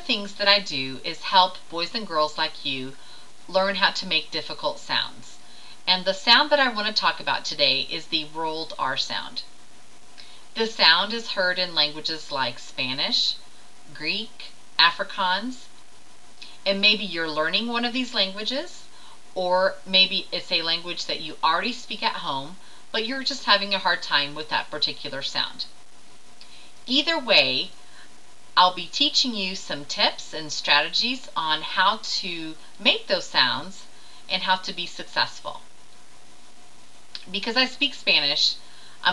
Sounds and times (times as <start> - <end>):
Speech: 0.0 - 9.5, 10.6 - 15.7, 16.6 - 25.7, 26.9 - 27.8, 28.6 - 35.7, 37.2 - 39.1.